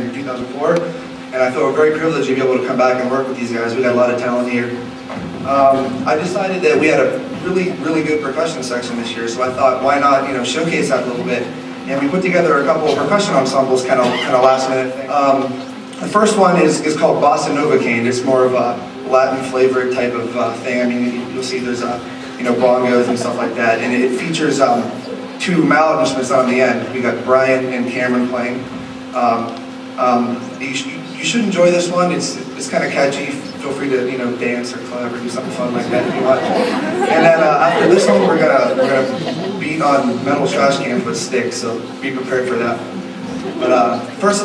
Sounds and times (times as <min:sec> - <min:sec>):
Speech: 0:00.0 - 0:04.8, 0:05.5 - 0:28.6, 0:29.2 - 0:42.9, 0:43.5 - 0:44.4.